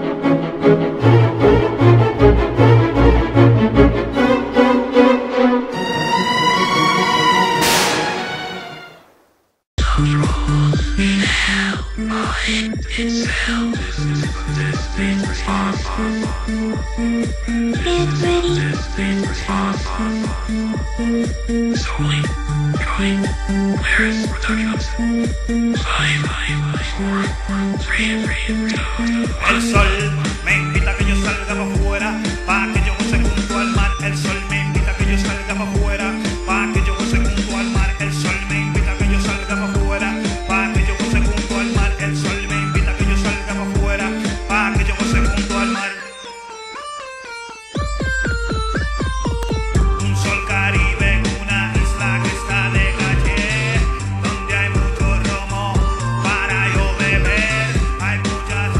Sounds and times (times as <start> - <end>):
Techno: 13.6 - 58.7.